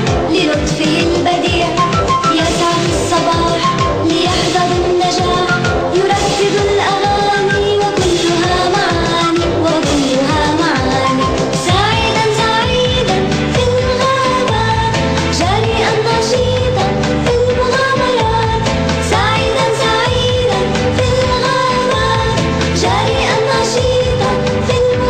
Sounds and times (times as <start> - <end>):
Soundtrack music: 0.0 - 25.0.